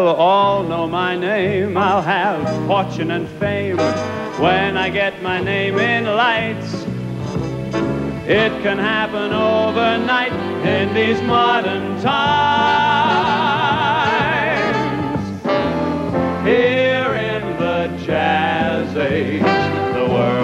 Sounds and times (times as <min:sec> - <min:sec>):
Male singing: 0:00.0 - 0:06.8, 0:08.3 - 0:15.2, 0:16.4 - 0:20.4
Music: 0:00.0 - 0:20.4.